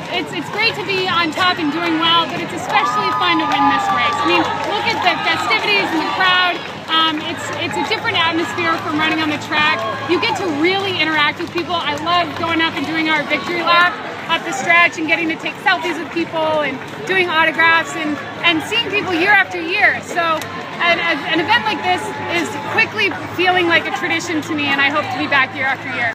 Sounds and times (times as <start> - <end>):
Outside, urban or manmade: 0.0 - 26.1
Speech: 0.0 - 26.1.